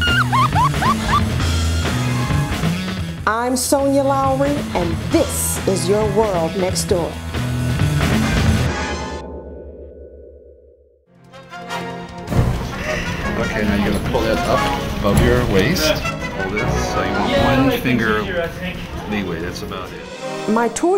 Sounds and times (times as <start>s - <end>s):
Music: 0.0s - 10.1s, 11.1s - 20.9s
Speech: 3.3s - 7.2s.